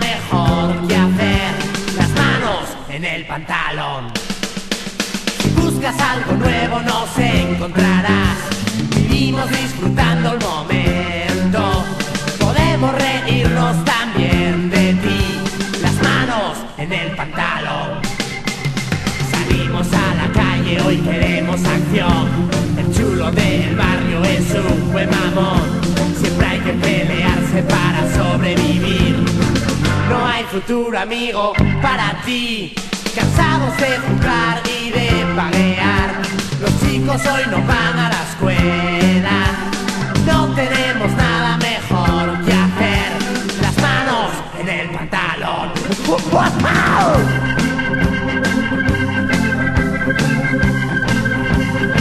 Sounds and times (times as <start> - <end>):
Music: 0.0 - 52.0.